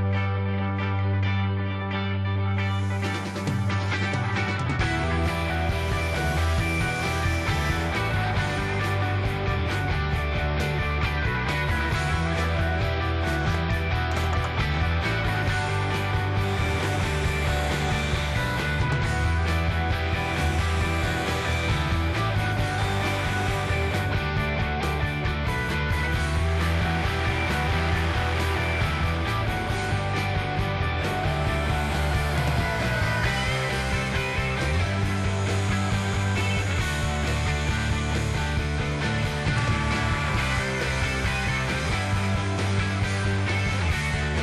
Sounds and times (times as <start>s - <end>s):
Wood: 14.1s - 24.1s, 31.0s - 42.8s.